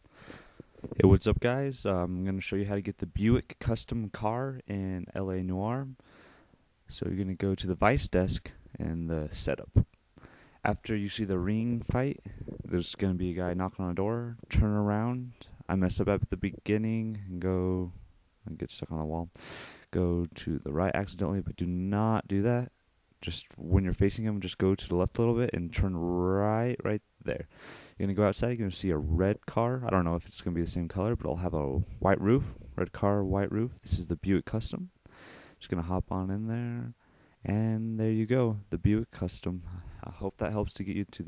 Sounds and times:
Speech: 0:00.9 - 0:06.0, 0:06.9 - 0:09.9, 0:10.6 - 0:35.0, 0:35.6 - 0:41.2.

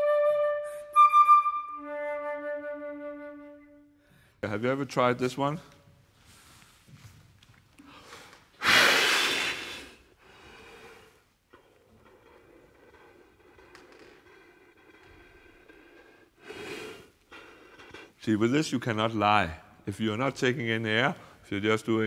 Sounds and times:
Speech: 0:04.4 - 0:05.7, 0:18.2 - 0:22.0.

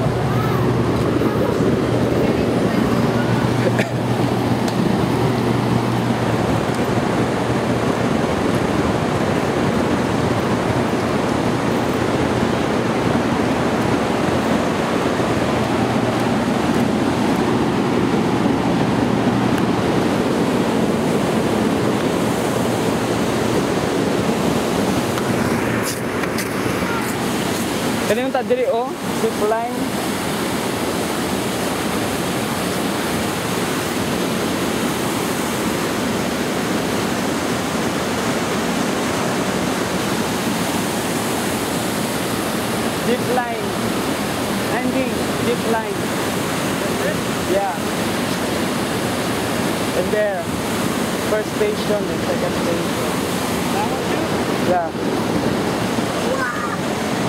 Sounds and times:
Waterfall: 0:00.0 - 0:57.2
Waves, surf: 0:00.0 - 0:57.2.

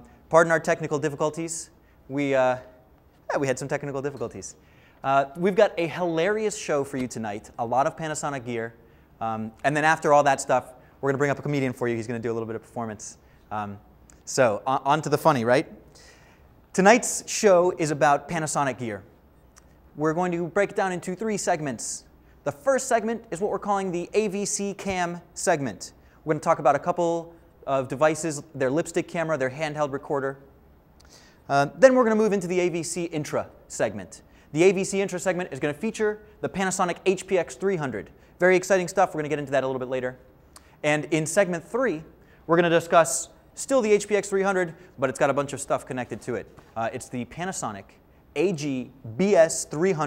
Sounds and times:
Speech: 0:00.0 - 0:15.8, 0:16.7 - 0:19.1, 0:20.0 - 0:30.4, 0:31.5 - 0:50.0.

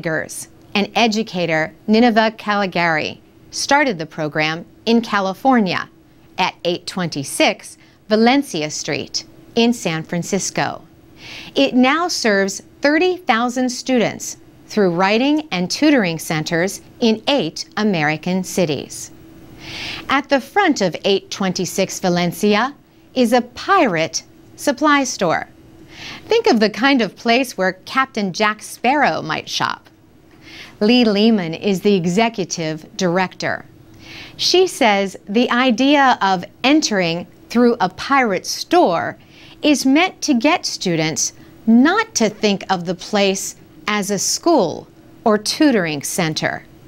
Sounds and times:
Speech: 0:00.0 - 0:10.9, 0:11.6 - 0:19.2, 0:20.1 - 0:25.5, 0:26.2 - 0:29.9, 0:30.8 - 0:33.7, 0:34.4 - 0:46.7.

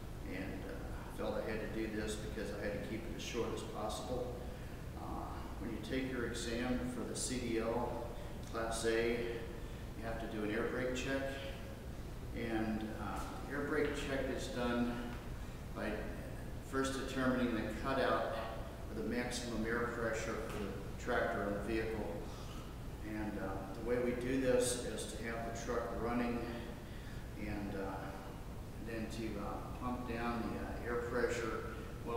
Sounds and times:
Speech: 0:00.2 - 0:11.7, 0:12.3 - 0:15.2, 0:15.8 - 0:22.4, 0:23.0 - 0:26.8, 0:27.4 - 0:32.1.

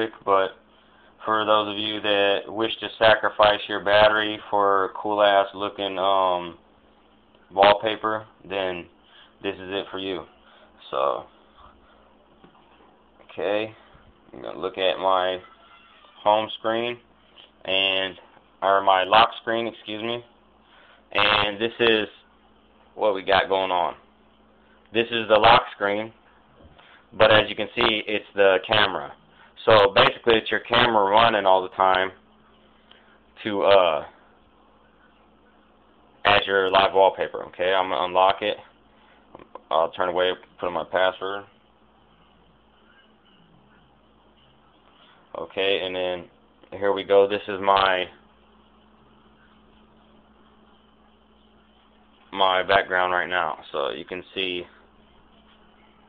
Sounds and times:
Speech: 0:00.0 - 0:00.6, 0:01.2 - 0:06.6, 0:07.5 - 0:11.4, 0:13.2 - 0:20.3, 0:21.1 - 0:22.3, 0:23.0 - 0:24.0, 0:24.9 - 0:26.2, 0:27.1 - 0:32.2, 0:33.4 - 0:34.2, 0:36.2 - 0:38.7, 0:39.4 - 0:41.6, 0:45.3 - 0:48.2, 0:52.2 - 0:56.0.

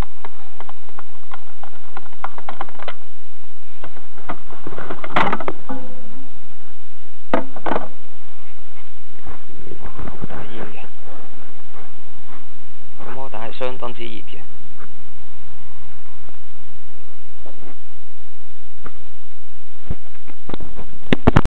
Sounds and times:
Speech: 0:13.0 - 0:14.5.

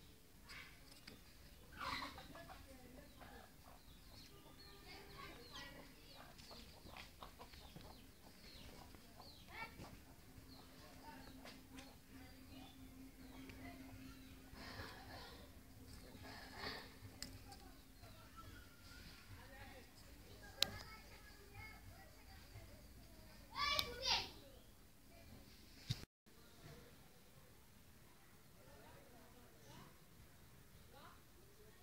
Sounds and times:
Speech: 0:07.8 - 0:25.4.

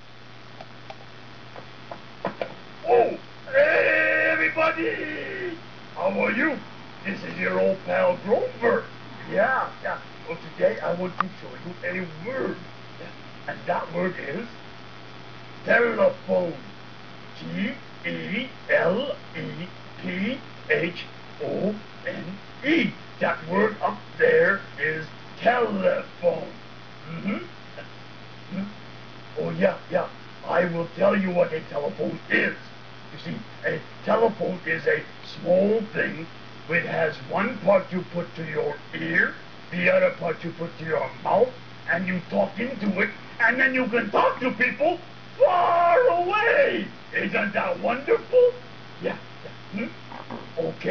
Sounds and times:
Speech: 0:02.8 - 0:14.6, 0:15.6 - 0:16.7, 0:17.4 - 0:27.9, 0:28.5 - 0:28.8, 0:29.4 - 0:50.9.

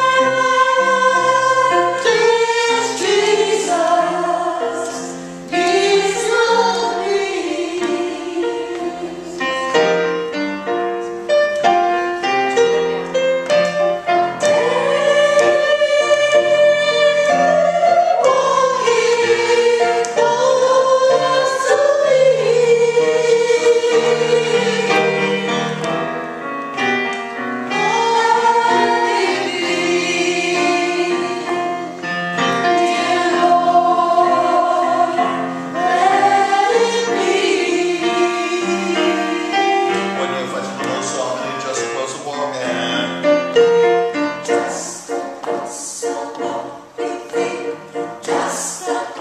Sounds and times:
Choir: 0:00.0 - 0:10.3, 0:14.0 - 0:26.2, 0:27.7 - 0:41.8, 0:44.4 - 0:49.2.

